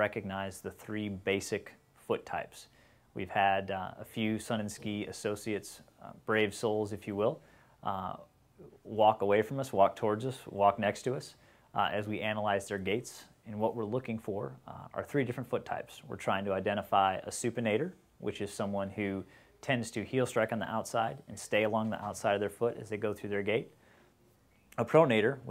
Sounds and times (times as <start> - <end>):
Speech: 0.0 - 23.8, 24.7 - 25.5
Inside, small room: 0.0 - 25.5.